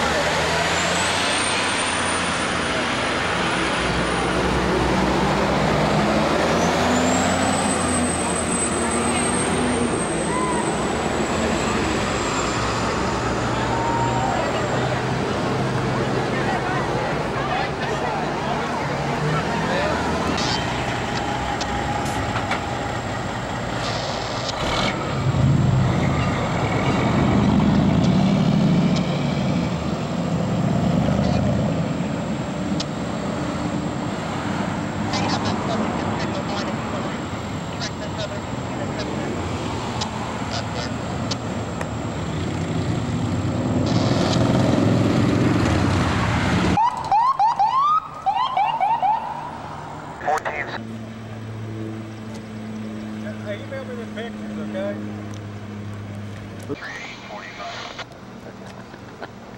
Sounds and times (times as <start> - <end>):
Car: 0.0 - 59.5
Outside, urban or manmade: 0.0 - 59.5
Speech: 50.2 - 50.8, 56.7 - 58.0.